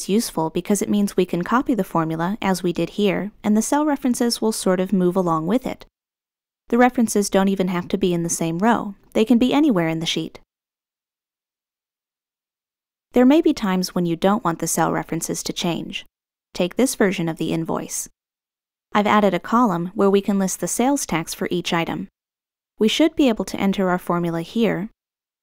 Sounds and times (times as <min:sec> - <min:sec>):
Speech: 0:00.0 - 0:05.9, 0:06.7 - 0:10.4, 0:13.2 - 0:18.1, 0:19.0 - 0:22.1, 0:22.8 - 0:25.0.